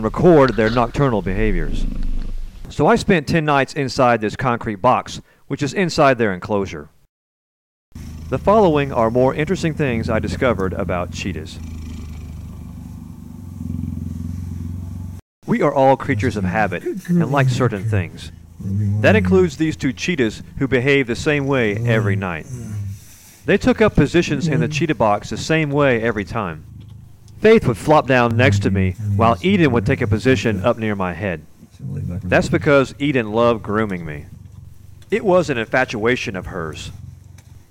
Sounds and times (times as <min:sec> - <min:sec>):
Speech: 0:00.0 - 0:01.9, 0:02.7 - 0:07.0, 0:08.3 - 0:11.6, 0:15.5 - 0:22.6, 0:23.5 - 0:26.6, 0:27.4 - 0:34.4, 0:35.1 - 0:37.0
Purr: 0:08.0 - 0:15.2, 0:24.2 - 0:30.5, 0:33.8 - 0:37.7.